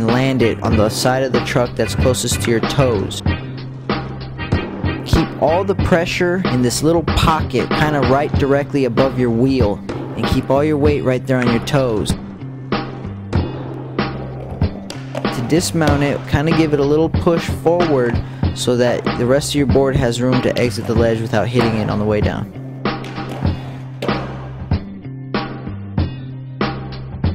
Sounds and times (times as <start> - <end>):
Speech: 0.0 - 3.2, 5.1 - 12.2, 15.4 - 22.5
Music: 0.0 - 27.3.